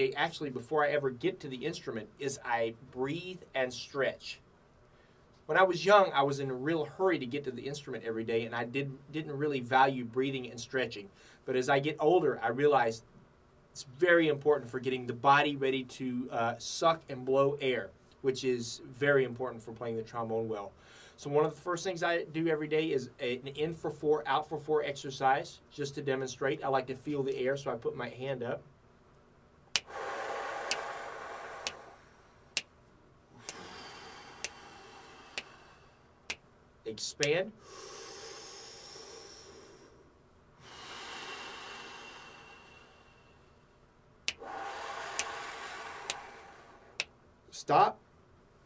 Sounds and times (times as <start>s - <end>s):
Speech: 0.0s - 4.4s, 5.5s - 13.1s, 13.8s - 28.7s, 36.9s - 37.6s, 47.5s - 48.0s.